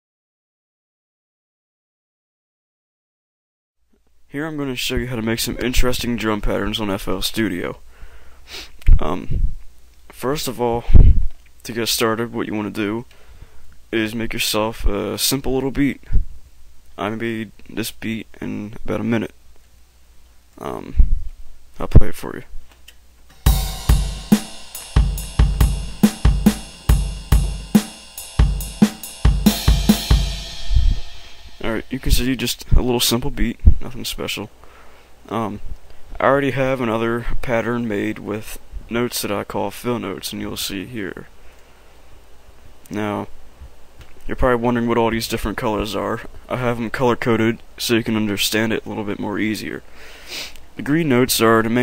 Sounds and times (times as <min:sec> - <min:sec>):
Speech: 0:04.3 - 0:07.8, 0:08.8 - 0:09.4, 0:10.1 - 0:13.1, 0:13.9 - 0:16.2, 0:17.0 - 0:19.4, 0:20.6 - 0:21.1, 0:21.8 - 0:22.6, 0:31.6 - 0:34.5, 0:35.3 - 0:41.3, 0:42.9 - 0:43.4, 0:44.2 - 0:49.8, 0:50.8 - 0:51.8
Music: 0:23.3 - 0:32.2.